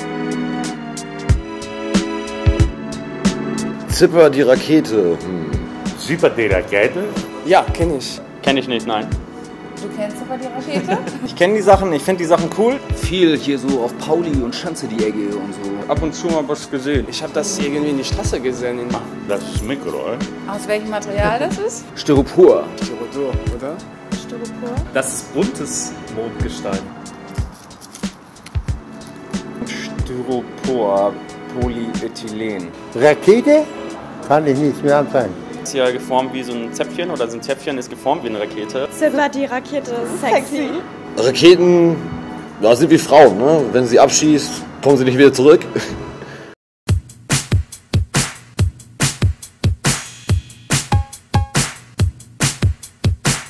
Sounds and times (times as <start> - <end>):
Music: 0.0 - 53.4.